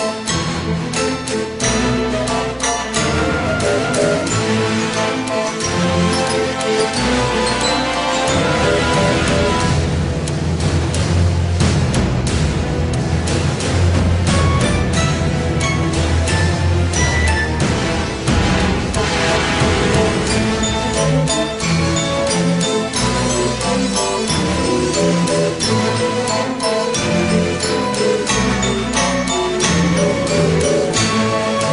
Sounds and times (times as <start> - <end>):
Music: 0.0 - 31.7.